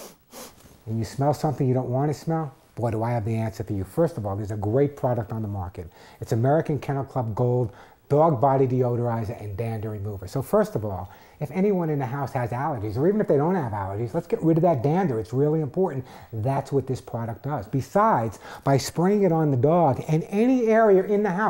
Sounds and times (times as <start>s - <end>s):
Speech: 0.9s - 21.5s.